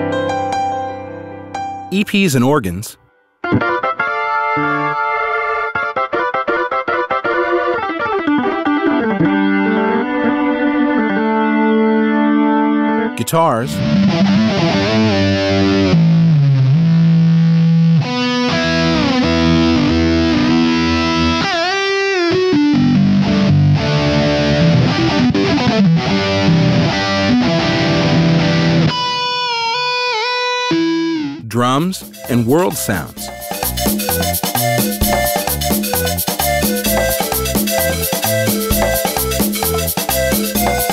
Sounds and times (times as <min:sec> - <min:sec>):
Music: 0:00.0 - 0:40.9
Speech: 0:01.9 - 0:03.0, 0:13.2 - 0:13.8, 0:31.4 - 0:33.3.